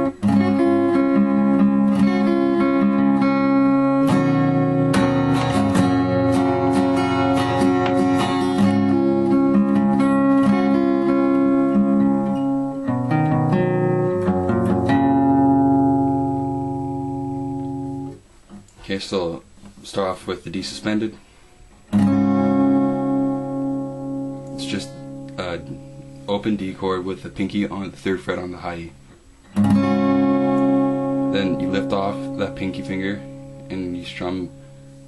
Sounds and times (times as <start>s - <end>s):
Acoustic guitar: 0.0s - 35.0s
Strum: 0.0s - 35.0s.